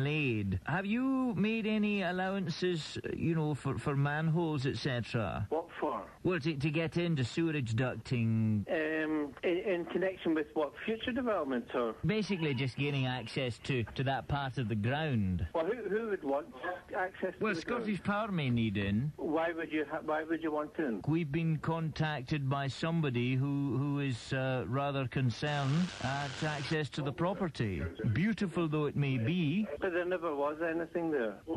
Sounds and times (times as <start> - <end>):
Speech: 0.0 - 31.5
Radio: 7.4 - 21.1, 24.6 - 31.5.